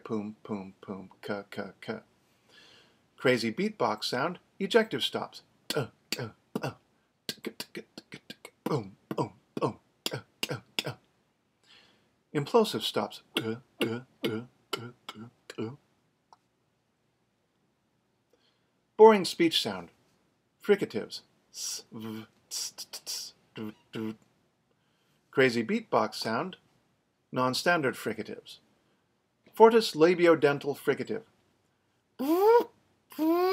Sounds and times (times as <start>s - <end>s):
Speech: 0.0s - 2.1s, 3.2s - 11.0s, 12.4s - 15.8s, 19.0s - 20.0s, 20.6s - 24.2s, 25.3s - 26.6s, 27.3s - 28.6s, 29.5s - 31.3s.